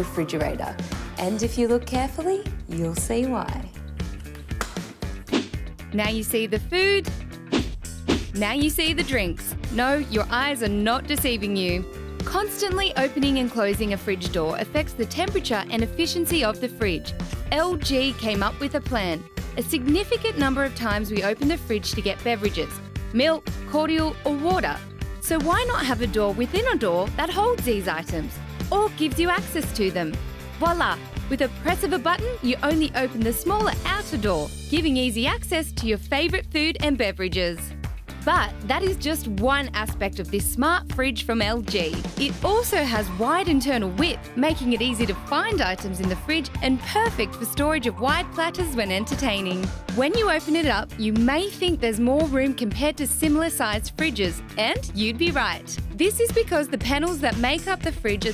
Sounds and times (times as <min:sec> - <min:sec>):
Music: 0:00.0 - 0:58.3
Speech: 0:06.0 - 0:07.1, 0:08.4 - 0:58.3.